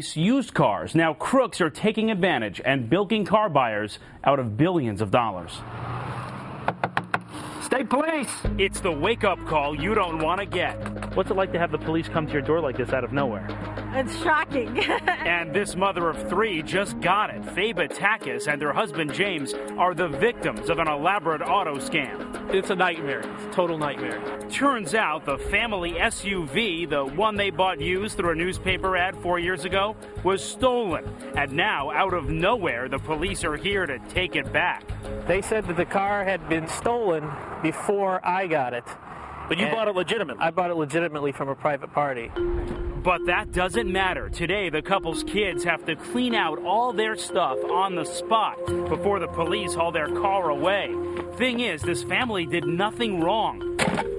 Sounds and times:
Speech: 0:00.0 - 0:05.6, 0:07.6 - 0:42.3, 0:43.0 - 0:53.6
Music: 0:08.4 - 0:37.0, 0:42.3 - 0:54.1.

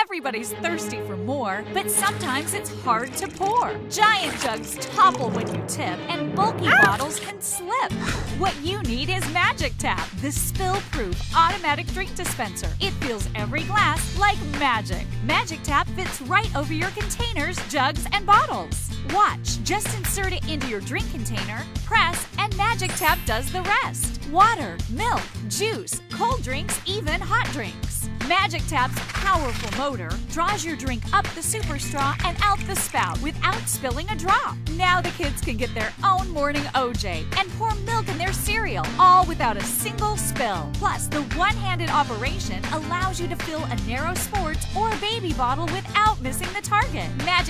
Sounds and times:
Music: 0:00.0 - 0:47.4
Speech: 0:00.0 - 0:47.4.

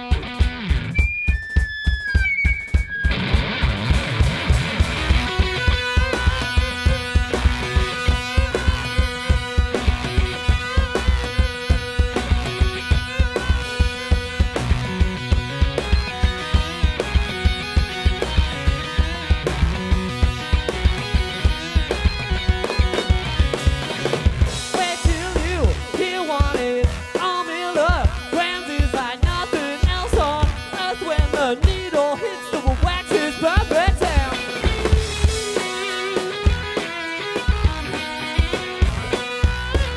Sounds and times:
Music: 0:00.0 - 0:39.9.

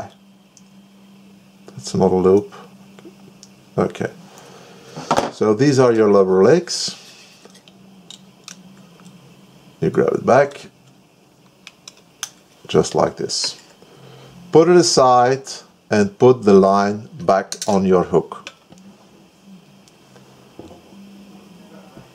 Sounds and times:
Speech: 0:01.7 - 0:02.7, 0:03.8 - 0:04.2, 0:05.4 - 0:07.0, 0:09.8 - 0:10.7, 0:12.7 - 0:13.6, 0:14.5 - 0:18.5.

